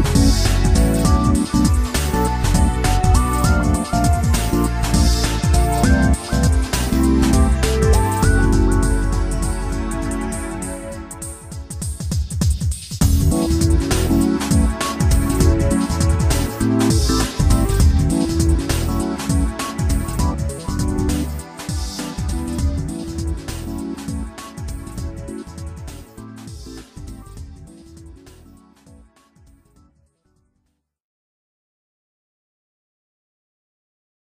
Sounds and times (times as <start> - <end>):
Theme music: 0.0 - 12.1, 13.0 - 29.1
Soundtrack music: 0.0 - 29.8
Video game music: 0.1 - 12.2.